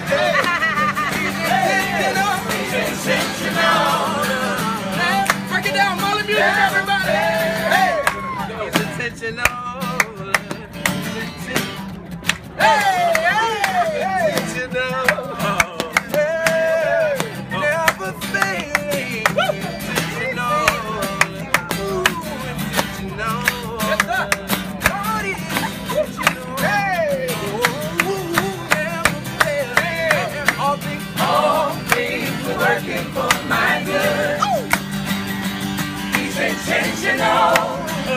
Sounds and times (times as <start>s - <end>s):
Music: 0.0s - 38.1s.